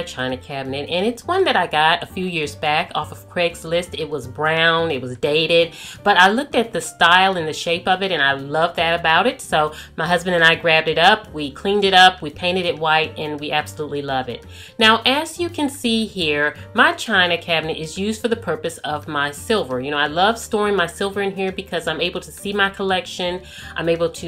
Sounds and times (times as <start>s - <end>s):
Music: 0.0s - 24.2s
Speech: 0.0s - 24.2s.